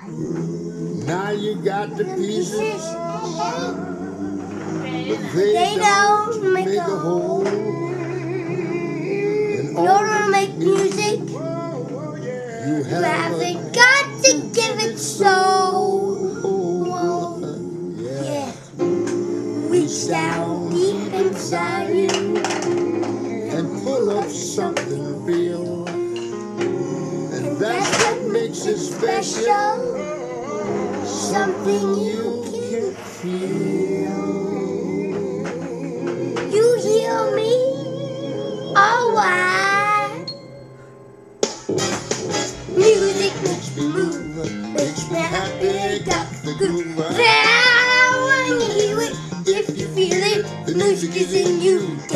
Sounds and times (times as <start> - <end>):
Male singing: 0.0 - 39.3, 42.8 - 52.1
Blues: 0.0 - 52.1
Child singing: 1.0 - 26.1, 27.3 - 40.3, 42.8 - 52.1.